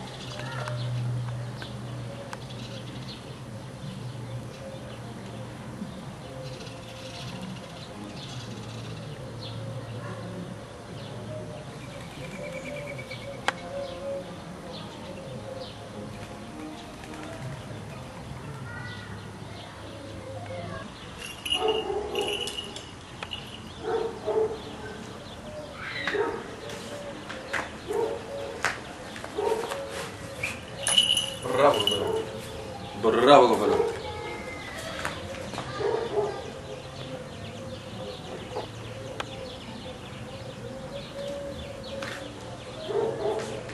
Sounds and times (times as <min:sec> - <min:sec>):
Bird: 0:19.9 - 0:43.7.